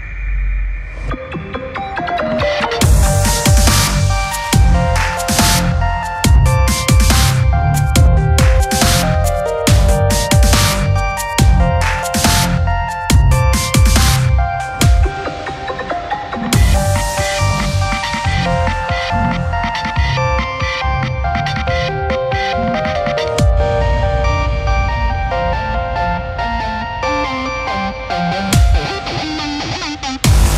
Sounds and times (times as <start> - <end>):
Dubstep: 0.0 - 30.5.